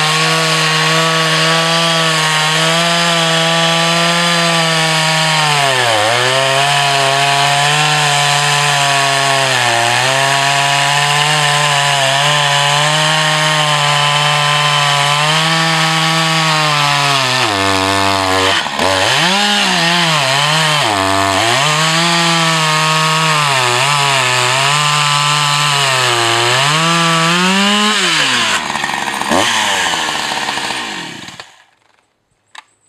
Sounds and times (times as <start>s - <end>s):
Chainsaw: 0.0s - 32.0s.